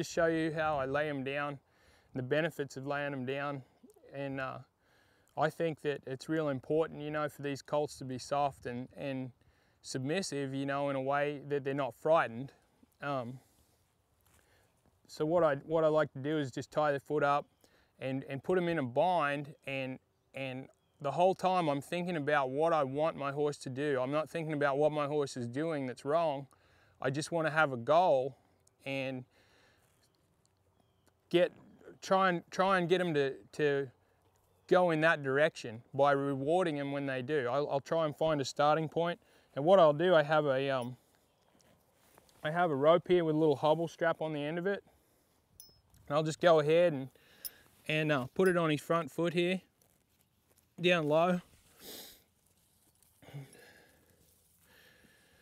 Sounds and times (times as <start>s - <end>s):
Speech: 0.0s - 1.6s, 2.2s - 4.7s, 5.4s - 13.4s, 15.1s - 29.3s, 31.3s - 34.0s, 34.7s - 41.0s, 42.4s - 44.8s, 46.1s - 47.1s, 47.9s - 49.7s, 50.8s - 51.5s.